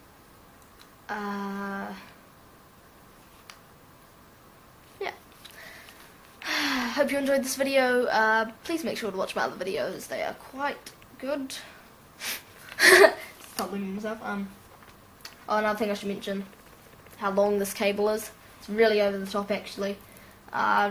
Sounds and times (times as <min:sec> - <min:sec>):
Inside, small room: 0:00.0 - 0:20.9
Child speech, kid speaking: 0:05.0 - 0:05.2, 0:06.9 - 0:11.8, 0:13.6 - 0:14.6, 0:15.5 - 0:16.5, 0:17.2 - 0:20.9.